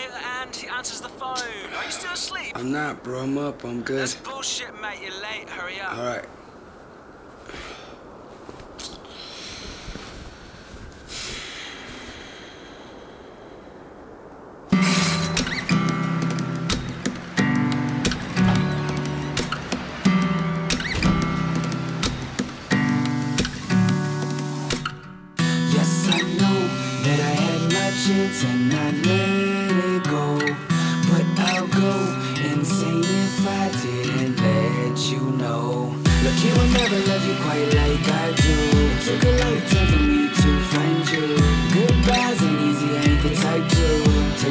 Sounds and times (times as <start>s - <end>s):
Music: 14.8s - 44.5s.